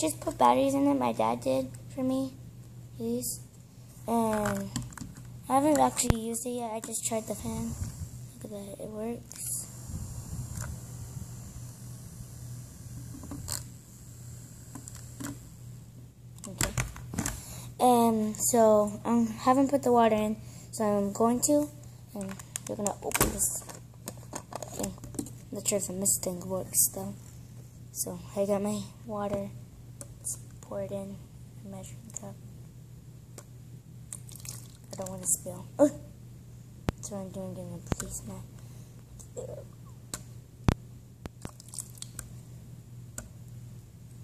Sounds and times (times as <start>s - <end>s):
Speech: 0.0s - 2.4s, 3.0s - 3.4s, 4.1s - 4.8s, 5.5s - 7.8s, 8.4s - 9.7s, 17.8s - 23.7s, 24.7s - 27.2s, 27.9s - 29.6s, 30.2s - 32.4s, 34.9s - 36.0s, 37.0s - 38.5s, 39.3s - 39.7s.